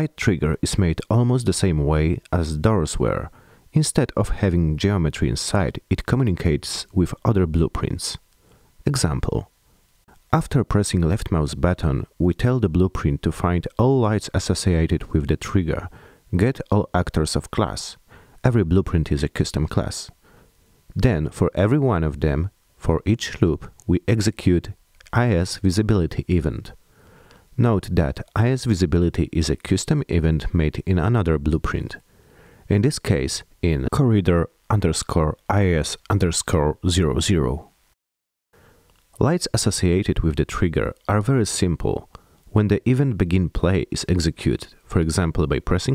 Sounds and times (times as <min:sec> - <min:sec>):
Speech: 0:00.0 - 0:08.2, 0:08.8 - 0:09.5, 0:10.2 - 0:20.2, 0:20.9 - 0:26.8, 0:27.6 - 0:32.0, 0:32.7 - 0:37.7, 0:39.2 - 0:45.9.